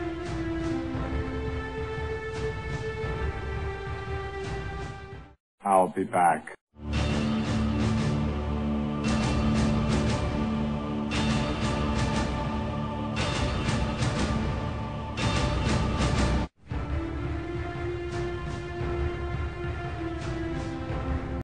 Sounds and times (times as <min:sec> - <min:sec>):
Music: 0:00.0 - 0:05.4, 0:06.8 - 0:21.4.